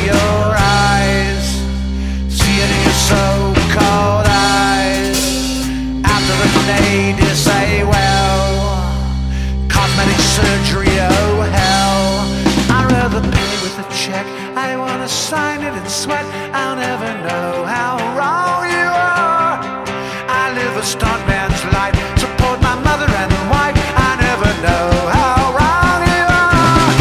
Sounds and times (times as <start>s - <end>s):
Independent music: 0.0s - 27.0s.